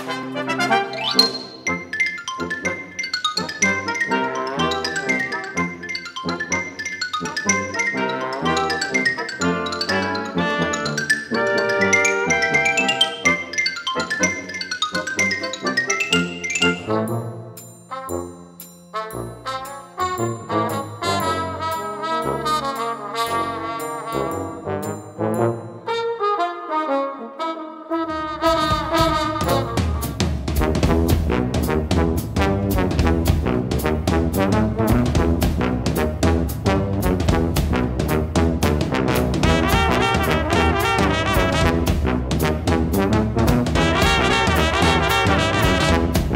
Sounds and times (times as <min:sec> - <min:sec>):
Trombone: 0:00.0 - 0:01.7, 0:03.4 - 0:46.3
Trumpet: 0:00.0 - 0:02.0, 0:03.4 - 0:46.3.